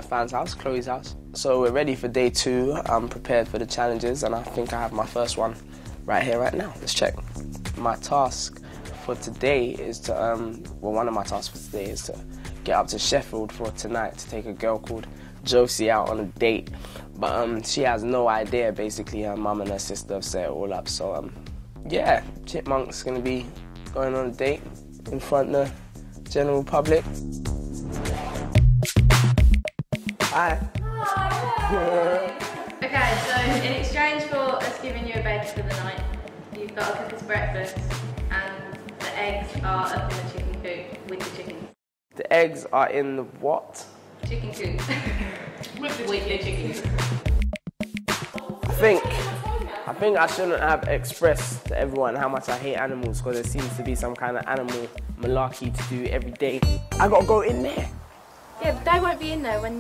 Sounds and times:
Music: 0.0s - 42.4s, 43.9s - 59.8s.

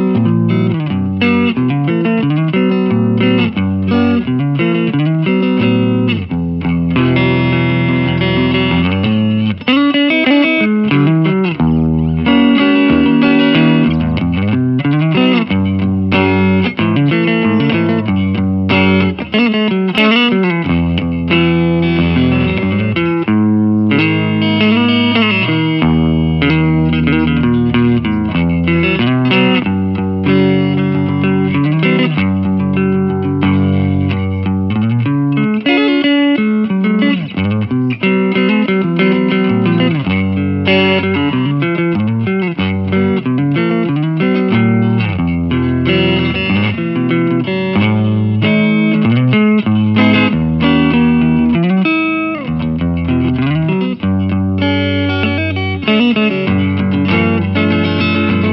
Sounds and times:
Strum: 0.0s - 58.5s.

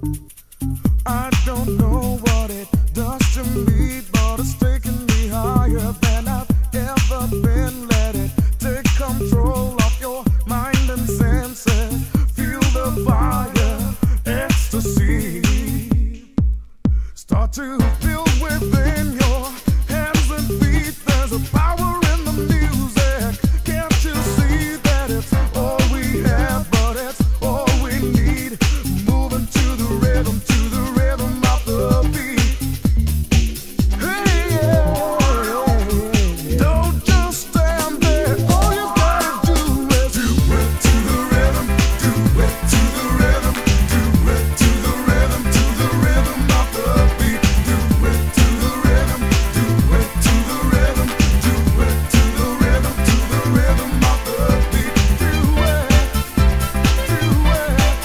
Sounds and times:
Music: 0.0s - 58.0s.

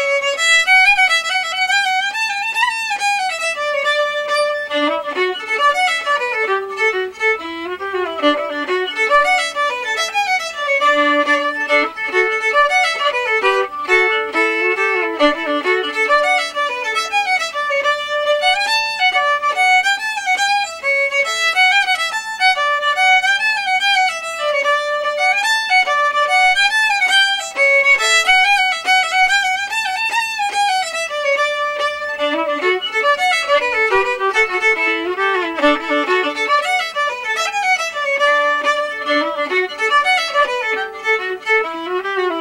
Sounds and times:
Violin, fiddle: 0.0s - 42.4s.

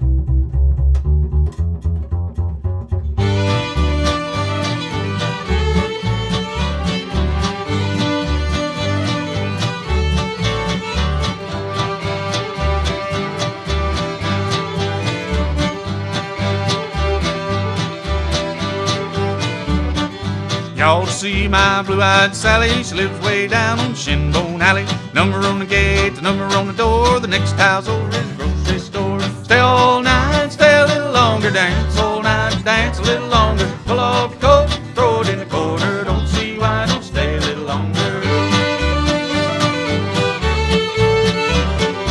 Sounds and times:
Music: 0.0s - 42.1s.

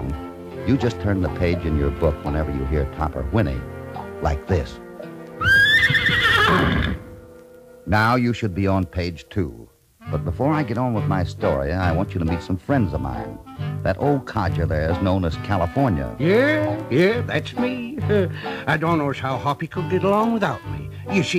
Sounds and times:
Speech: 0.0s - 3.6s, 4.2s - 4.8s, 7.9s - 21.3s
Music: 0.0s - 21.3s.

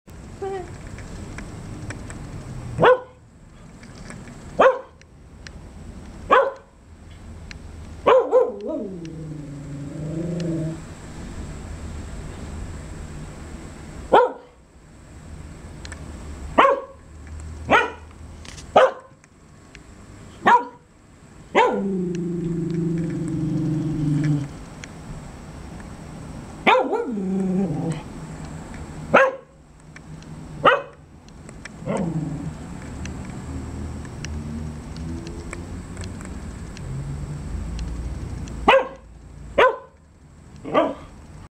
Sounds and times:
Bark: 2.8s - 3.2s, 4.6s - 5.0s, 6.3s - 6.8s, 8.0s - 8.8s, 14.1s - 14.6s, 16.6s - 17.0s, 17.7s - 18.1s, 18.8s - 19.2s, 20.4s - 20.9s, 21.6s - 21.9s, 26.6s - 27.2s, 29.1s - 29.6s, 30.6s - 31.0s, 38.7s - 40.0s, 40.6s - 41.1s
Canidae, dogs, wolves: 8.1s - 10.8s, 21.6s - 24.6s, 26.7s - 28.1s, 38.7s - 40.0s, 40.6s - 41.2s.

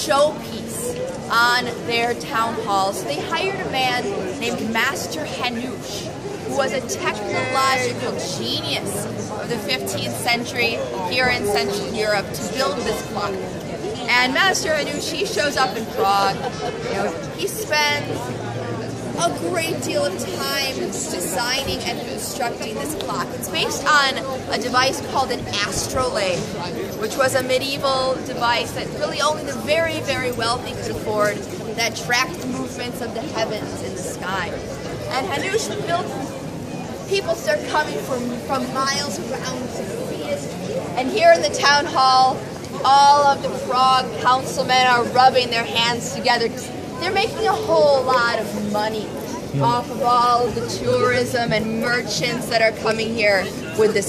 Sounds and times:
Speech: 0.0s - 36.4s, 37.0s - 54.0s.

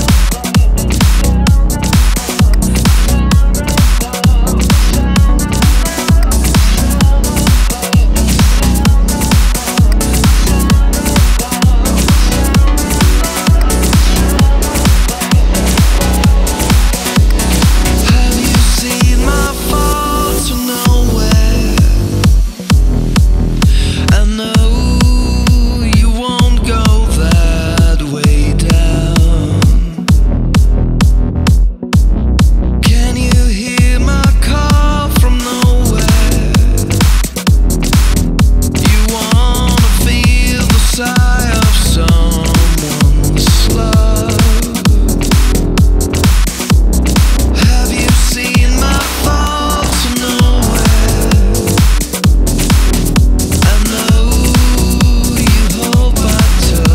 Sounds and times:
Music: 0.0s - 56.9s.

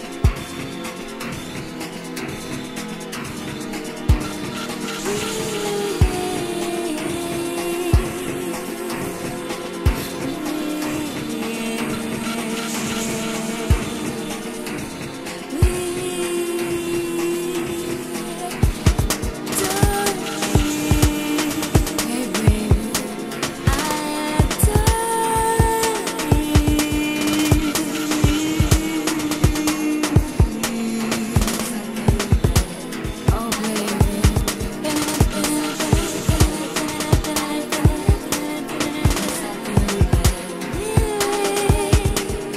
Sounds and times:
Music: 0.0s - 42.5s.

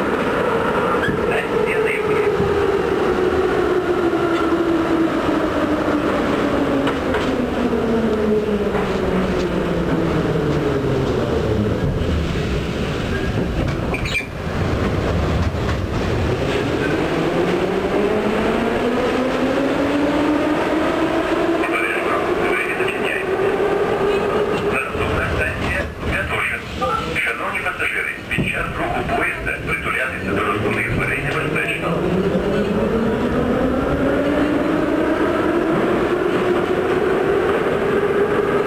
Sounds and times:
Subway, metro, underground: 0.0s - 38.6s
Train: 0.0s - 38.6s.

